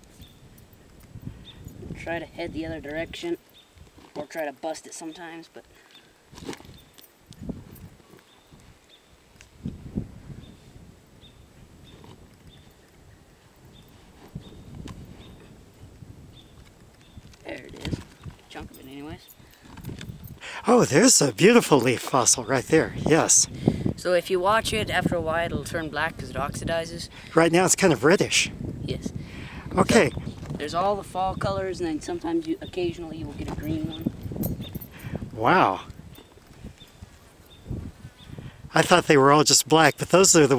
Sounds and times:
Outside, rural or natural: 0.0s - 40.5s
Speech: 2.0s - 3.4s, 20.6s - 29.1s, 29.8s - 34.1s, 38.7s - 40.5s.

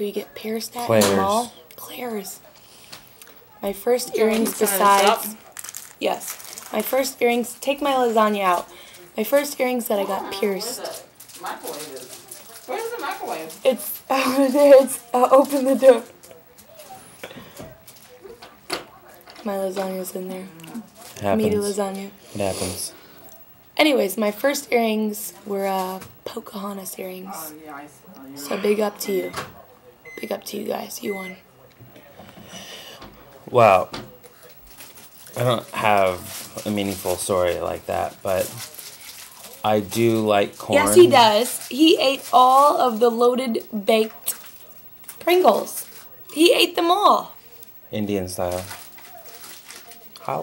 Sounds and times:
Inside, small room: 0.0s - 50.4s.

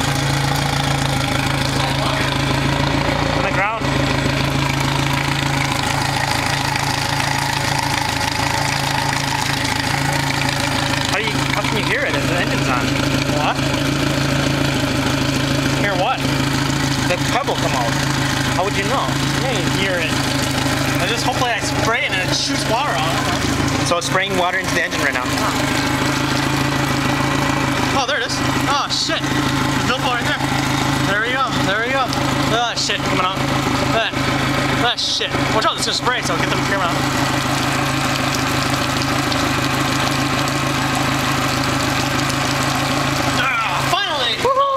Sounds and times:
Idling: 0.0s - 44.4s
Medium engine (mid frequency): 0.0s - 44.7s
Vehicle: 0.0s - 44.7s
Speech: 3.4s - 3.9s, 11.1s - 13.6s, 15.8s - 16.3s, 17.1s - 18.0s, 18.6s - 20.2s, 21.0s - 25.6s, 28.0s - 30.4s, 31.1s - 34.2s, 34.8s - 37.0s, 43.4s - 44.7s.

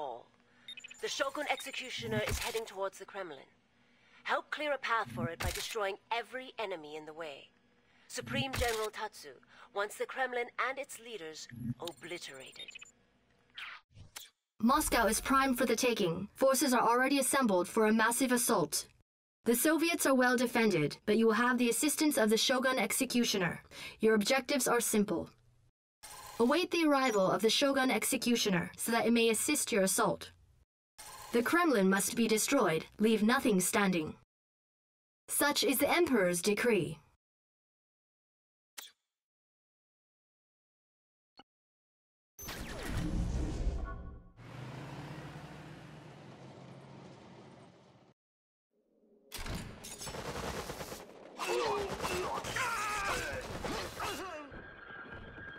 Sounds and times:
Speech synthesizer: 0.0s - 0.3s, 1.0s - 3.5s, 4.3s - 7.5s, 8.1s - 12.8s, 14.6s - 25.4s, 26.4s - 30.3s, 31.3s - 34.2s, 35.3s - 37.1s, 51.4s - 54.6s.

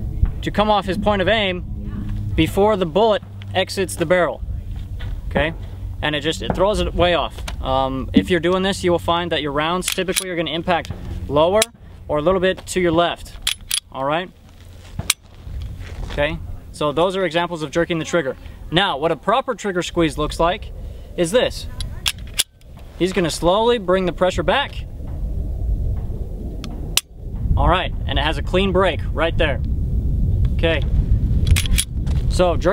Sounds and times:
Speech: 0.4s - 1.6s, 2.4s - 4.4s, 16.1s - 20.6s, 23.0s - 24.9s, 27.6s - 29.6s, 30.6s - 30.9s, 32.3s - 32.7s.

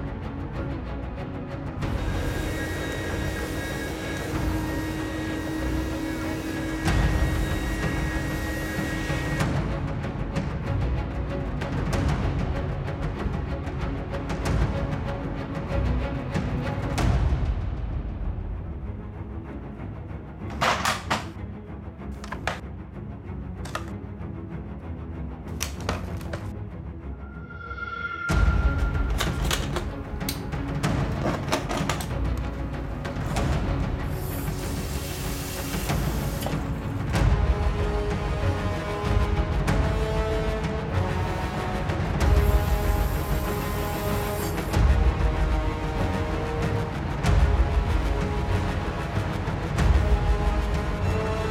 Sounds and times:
Music: 0.0s - 51.5s.

